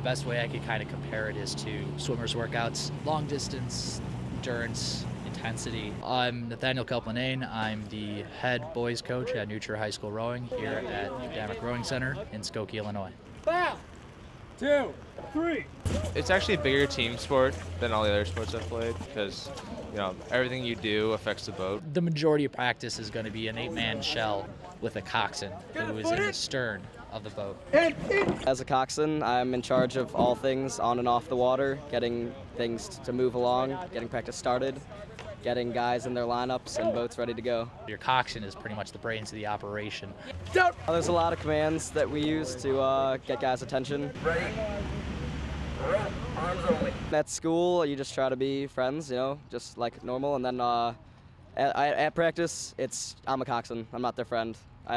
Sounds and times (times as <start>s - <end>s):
Speech: 0.0s - 13.8s, 14.6s - 44.9s, 45.8s - 51.0s, 51.6s - 54.9s.